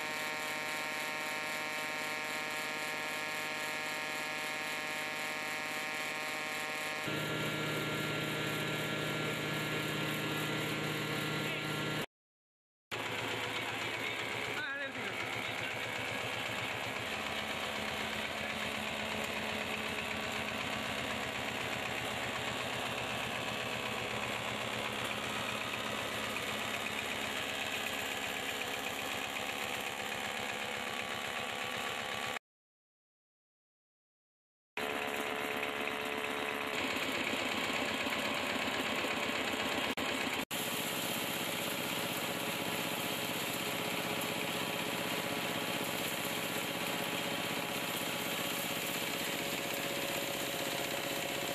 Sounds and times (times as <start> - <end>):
Power tool: 0.0 - 12.1, 12.9 - 32.4, 34.8 - 51.5.